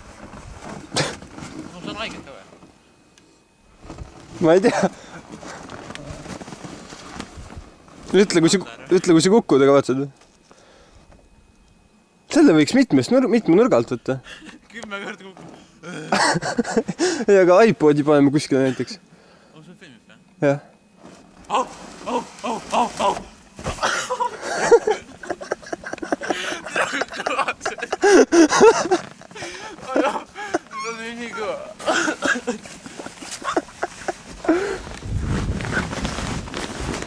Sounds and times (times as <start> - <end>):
Speech: 1.7 - 2.5, 30.8 - 31.8.